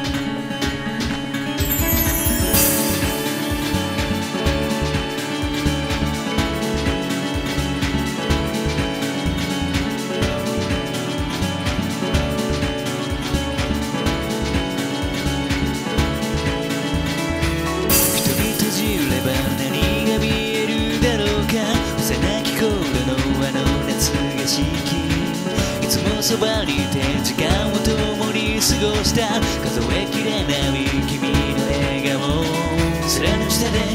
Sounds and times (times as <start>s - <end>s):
Music: 0.0s - 33.9s.